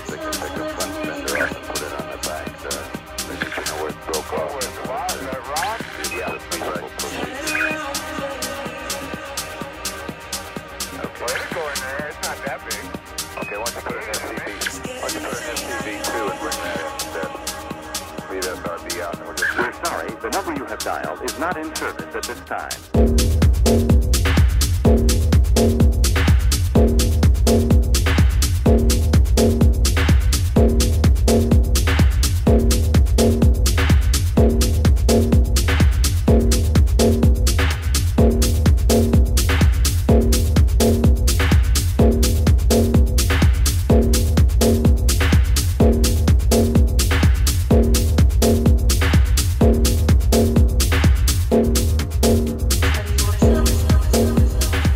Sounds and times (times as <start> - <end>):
Techno: 0.0 - 54.9.